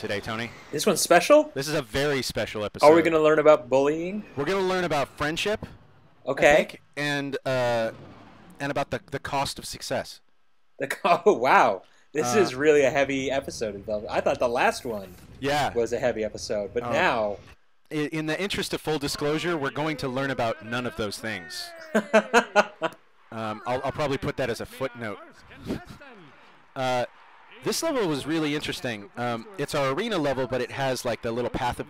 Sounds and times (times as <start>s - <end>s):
Speech: 10.8s - 22.0s, 23.4s - 31.9s.